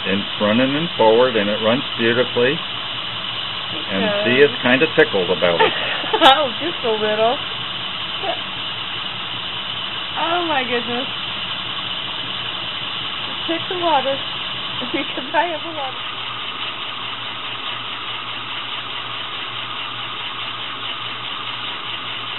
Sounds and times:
Train: 6.3s - 22.3s.

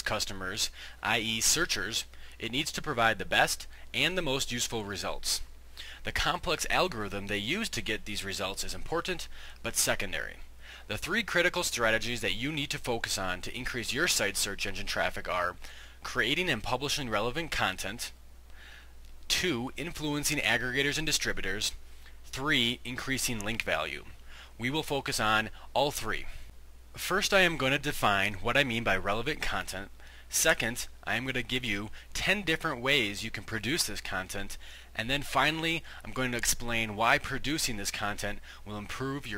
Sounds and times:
Speech: 0.0s - 18.2s, 19.3s - 26.4s, 27.0s - 39.3s.

